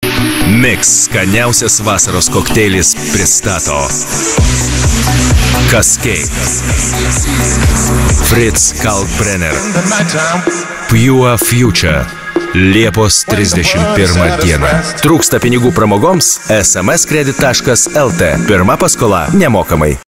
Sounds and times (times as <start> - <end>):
Music: 0.0 - 20.0
Speech: 0.4 - 4.0, 5.6 - 6.4, 8.2 - 20.0.